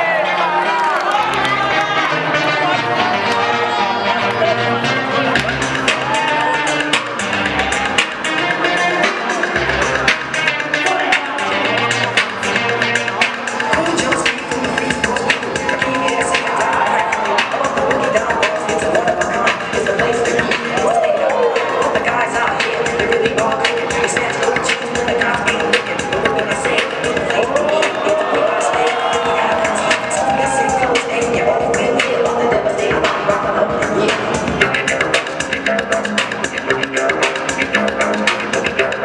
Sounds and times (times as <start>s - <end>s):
Music: 0.0s - 39.0s.